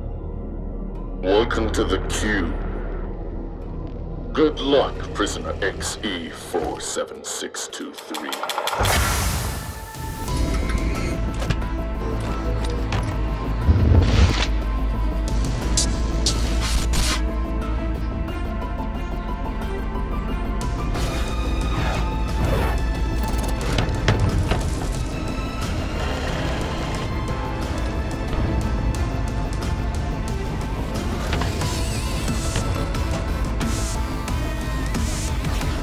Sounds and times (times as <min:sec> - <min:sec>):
Music: 0:00.0 - 0:35.8.